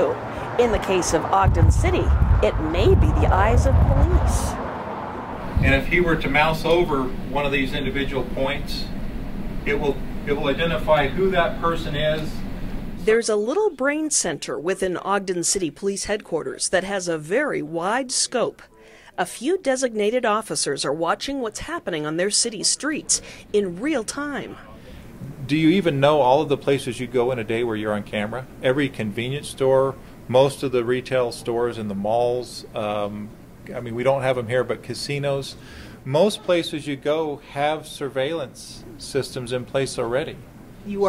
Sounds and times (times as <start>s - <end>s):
Speech: 0.0s - 4.6s, 5.6s - 8.9s, 9.7s - 12.4s, 13.1s - 41.0s.